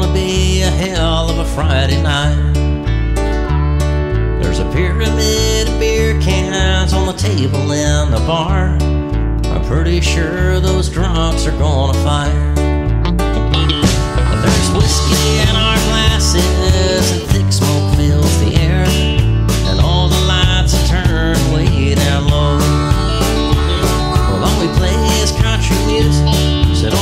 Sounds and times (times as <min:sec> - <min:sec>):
Tender music: 0:12.9 - 0:27.0.